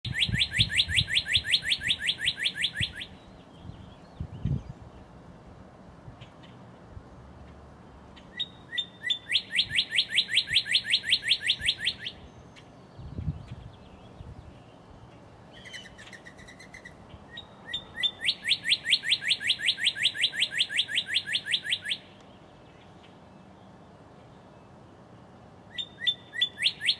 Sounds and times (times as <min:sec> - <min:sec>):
Bird vocalization, bird call, bird song: 0:00.1 - 0:05.2, 0:08.2 - 0:26.9.